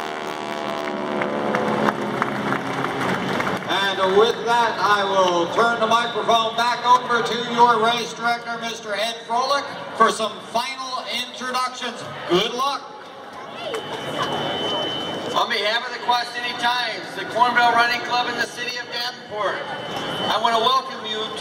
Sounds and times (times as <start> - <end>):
Outside, urban or manmade: 0.0 - 21.4
Crowd: 1.5 - 21.4
Speech: 3.7 - 12.9, 20.3 - 21.4.